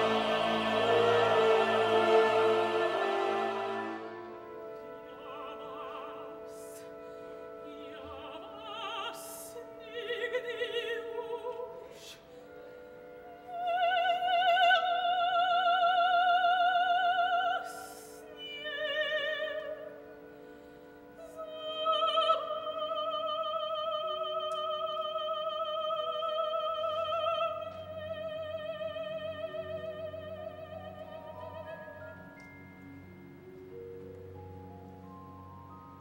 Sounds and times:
Opera: 0.0s - 36.0s.

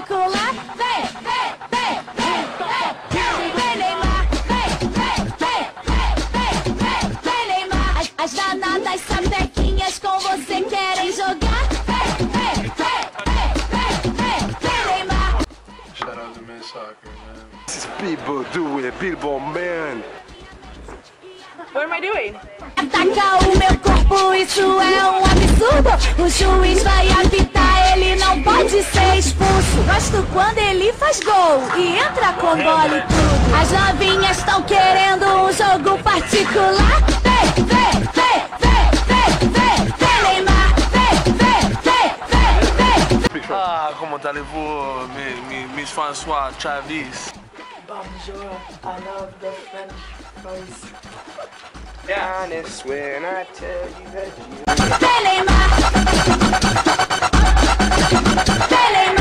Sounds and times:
Music: 0.0s - 59.2s.

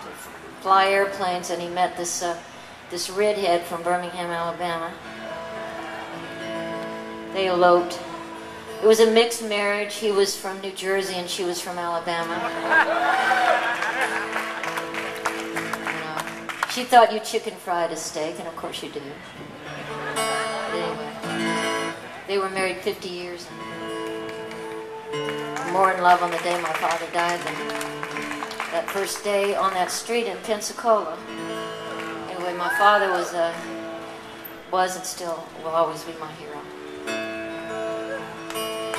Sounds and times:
Speech: 15.9s - 19.2s, 25.7s - 27.6s, 28.8s - 31.2s, 32.3s - 33.6s.

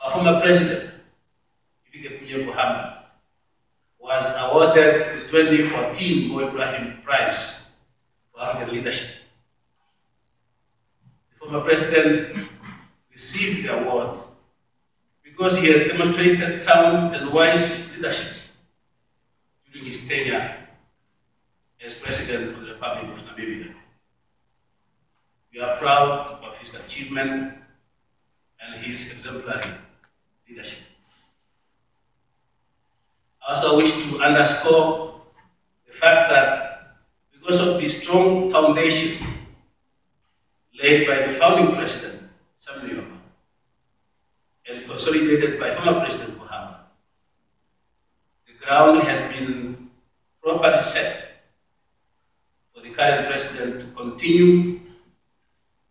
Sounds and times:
Speech: 0.0s - 0.9s, 1.9s - 3.0s, 4.0s - 7.6s, 8.4s - 9.2s, 11.4s - 14.2s, 15.3s - 18.5s, 19.7s - 20.7s, 21.8s - 23.8s, 25.6s - 27.6s, 28.6s - 29.8s, 30.5s - 30.9s, 33.4s - 35.2s, 35.9s - 36.8s, 37.4s - 39.4s, 40.8s - 43.2s, 44.7s - 46.8s, 48.5s - 49.8s, 50.4s - 51.4s, 52.8s - 54.8s
Inside, large room or hall: 0.0s - 55.9s.

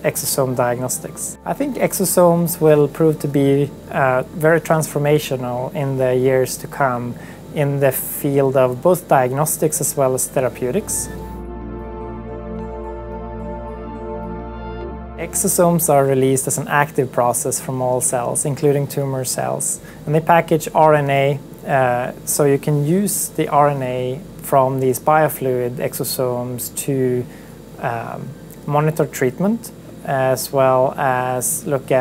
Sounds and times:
Speech: 0.0s - 11.2s, 15.2s - 32.0s
Music: 0.0s - 32.0s.

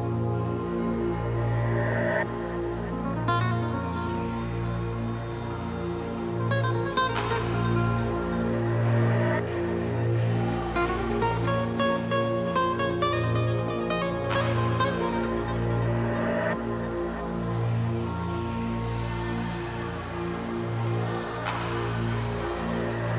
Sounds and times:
Music: 0.0s - 23.1s.

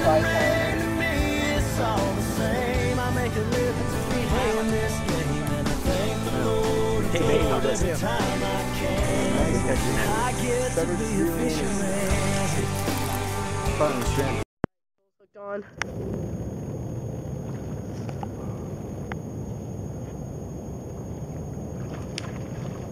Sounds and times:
Speech: 0.0s - 0.6s, 7.1s - 8.2s, 9.4s - 11.7s, 13.8s - 14.4s
Music: 0.0s - 14.5s.

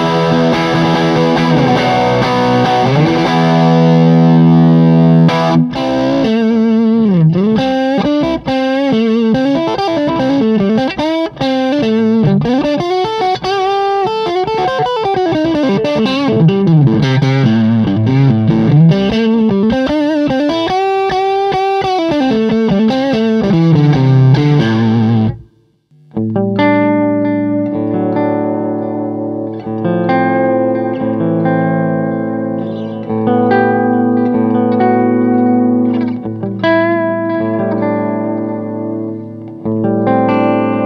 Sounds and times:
Effects unit: 0.0s - 40.8s
Electric guitar: 0.0s - 40.8s.

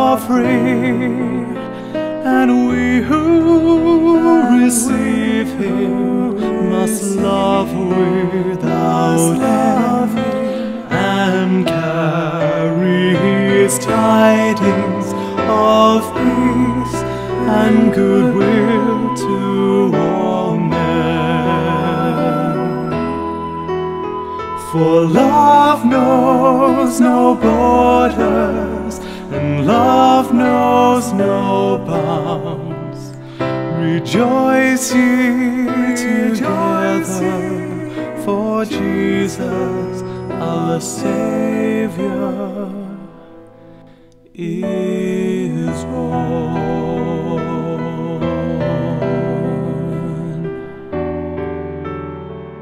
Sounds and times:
Christian music: 0.0s - 52.6s
Tender music: 0.0s - 52.6s.

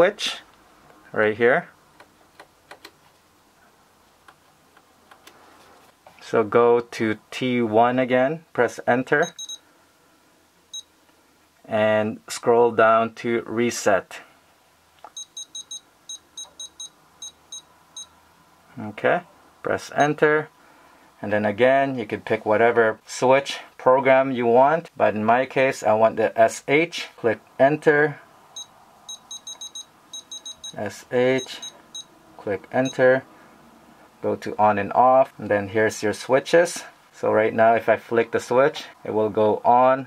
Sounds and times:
Speech: 0.0s - 0.5s, 1.1s - 1.8s, 6.2s - 9.3s, 11.7s - 14.3s, 18.7s - 20.5s, 21.2s - 28.2s, 30.8s - 31.7s, 32.4s - 33.3s, 34.2s - 40.0s
Inside, small room: 0.0s - 40.0s.

